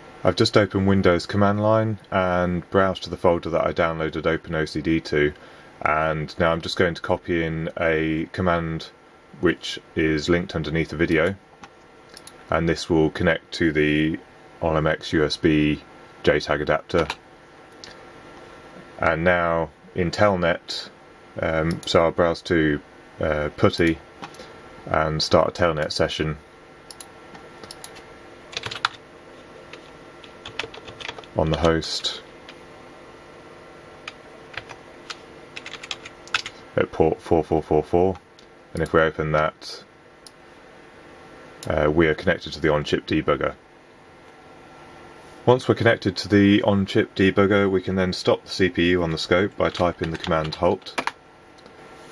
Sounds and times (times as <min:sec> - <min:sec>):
Speech: 0:00.2 - 0:11.4, 0:12.5 - 0:17.2, 0:19.0 - 0:24.0, 0:24.9 - 0:26.4, 0:31.4 - 0:32.3, 0:36.8 - 0:39.9, 0:41.6 - 0:43.6, 0:45.4 - 0:51.0
Typing: 0:28.5 - 0:29.0, 0:30.4 - 0:31.3, 0:34.6 - 0:36.5.